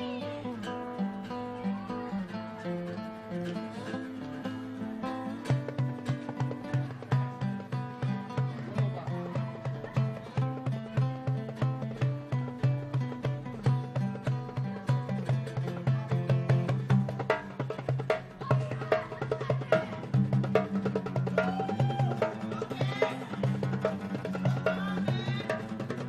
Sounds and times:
Music: 0.0 - 26.0
Speech: 1.3 - 2.5, 8.2 - 11.4, 18.4 - 20.2, 22.4 - 23.6.

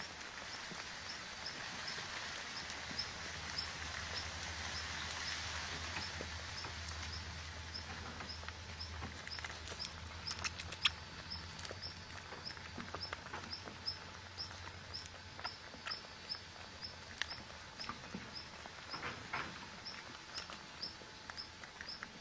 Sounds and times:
Outside, rural or natural: 0.0 - 22.2
Domestic animals, pets: 0.1 - 22.2.

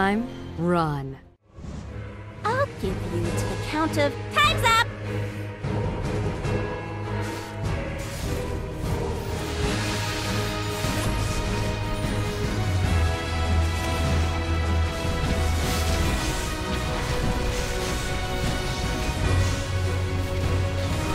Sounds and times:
Theme music: 0.0 - 21.1.

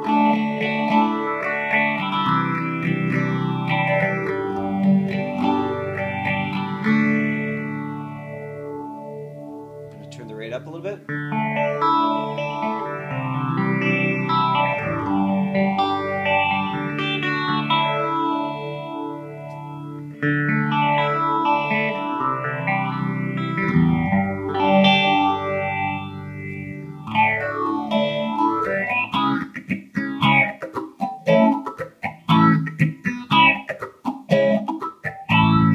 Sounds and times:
Distortion: 0.0 - 35.7
Effects unit: 0.0 - 35.7
Guitar: 0.0 - 35.7
Speech: 10.0 - 11.1.

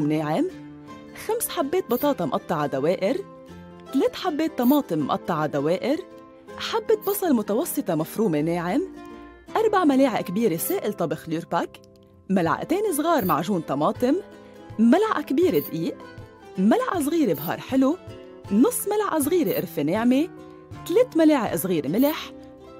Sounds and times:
Speech: 0.0 - 0.5, 1.2 - 3.2, 3.9 - 6.0, 6.6 - 8.9, 9.6 - 14.2, 14.8 - 16.0, 16.6 - 22.3
Music: 0.0 - 22.8.

